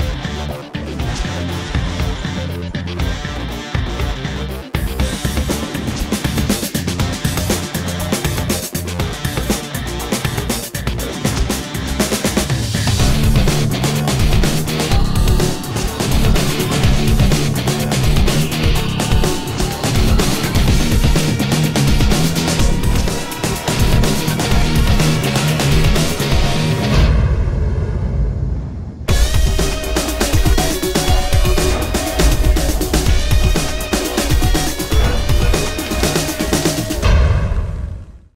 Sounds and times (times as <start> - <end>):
Music: 0.0 - 38.3.